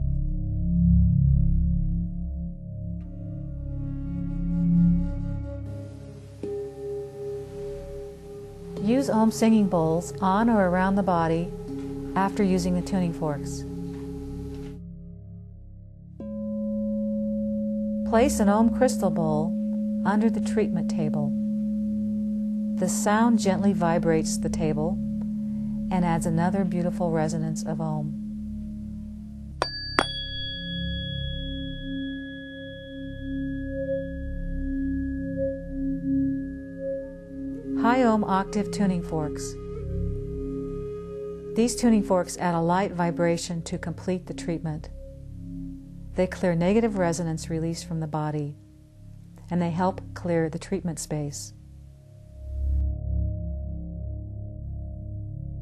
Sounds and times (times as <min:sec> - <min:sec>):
Tuning fork: 0:05.6 - 0:55.6.